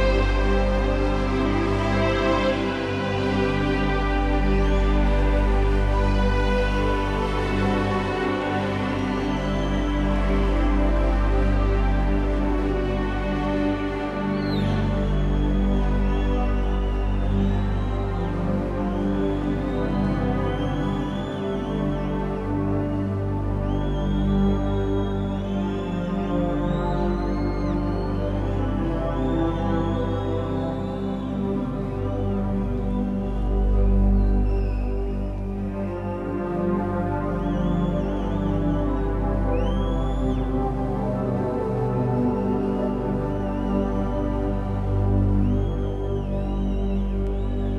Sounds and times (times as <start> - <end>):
Music: 0.0 - 47.7.